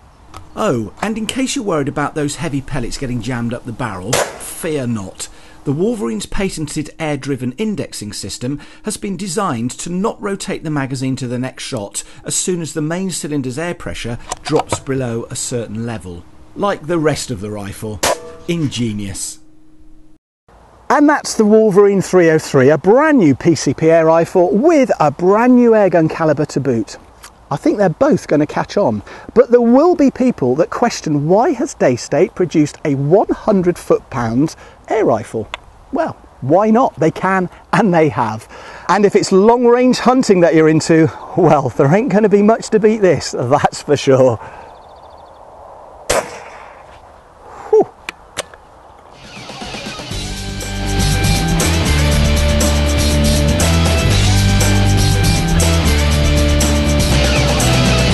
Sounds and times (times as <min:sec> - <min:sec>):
Speech: 0:00.6 - 0:19.4, 0:20.9 - 0:44.4.